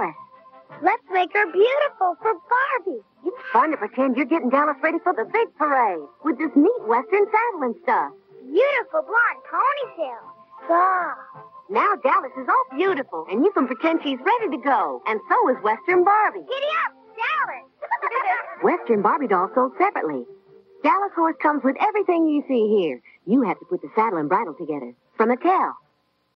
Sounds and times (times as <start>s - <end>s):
Music: 0.0s - 26.3s
Speech: 0.8s - 17.5s, 18.6s - 25.8s.